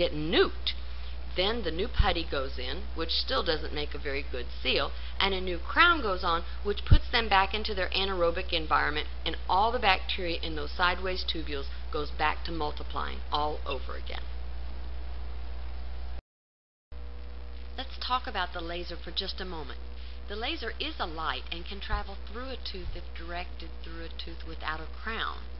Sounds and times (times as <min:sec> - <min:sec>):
Speech: 0:00.0 - 0:00.8, 0:01.4 - 0:14.3, 0:17.8 - 0:25.5.